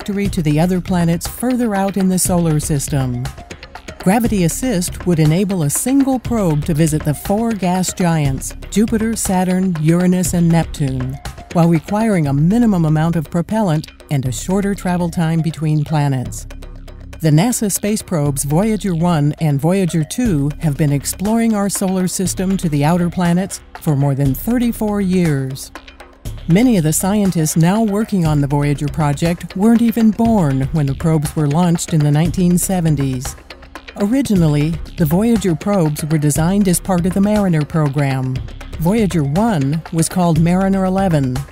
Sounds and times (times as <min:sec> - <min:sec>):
Music: 0:00.0 - 0:41.5
Narration, monologue: 0:00.0 - 0:41.5.